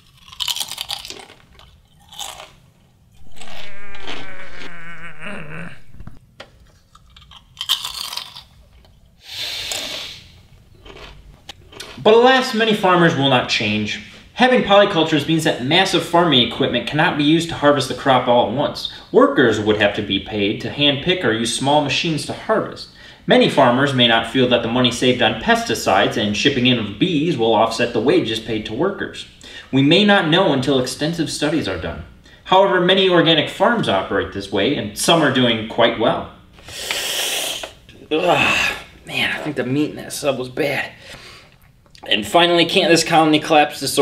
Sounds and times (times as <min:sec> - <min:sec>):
Inside, small room: 0:00.0 - 0:44.0
Speech: 0:11.9 - 0:36.4, 0:38.0 - 0:41.0, 0:42.0 - 0:44.0.